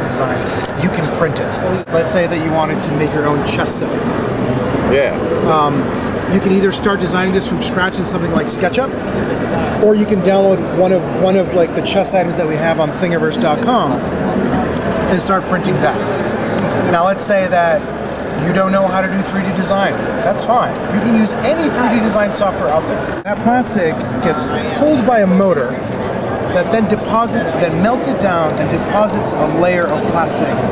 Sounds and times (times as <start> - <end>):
Speech: 0.0 - 4.0, 4.8 - 9.0, 9.6 - 14.1, 15.1 - 16.1, 16.8 - 25.9, 26.5 - 30.7.